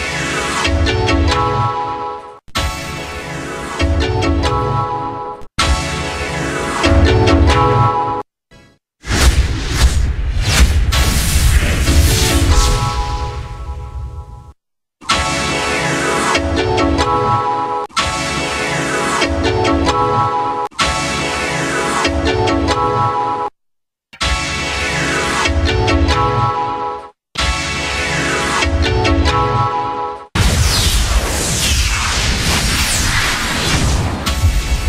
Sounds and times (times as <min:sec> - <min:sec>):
Music: 0:00.0 - 0:08.8, 0:11.9 - 0:23.5, 0:24.2 - 0:30.3.